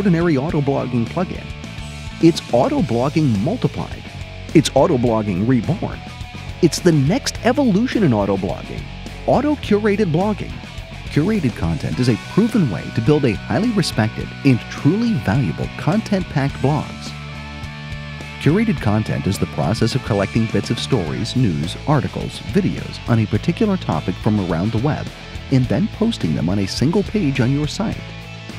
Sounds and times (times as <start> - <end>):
Speech: 0.0 - 1.5, 2.2 - 6.0, 6.6 - 17.2, 18.4 - 28.0
Music: 0.0 - 28.5.